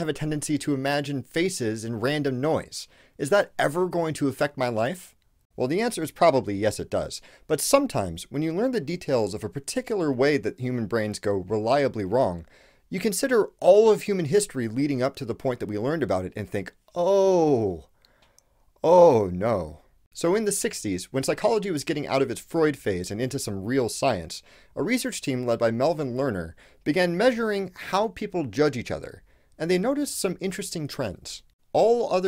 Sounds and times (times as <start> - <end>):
Speech: 0.0 - 17.9, 18.8 - 32.2.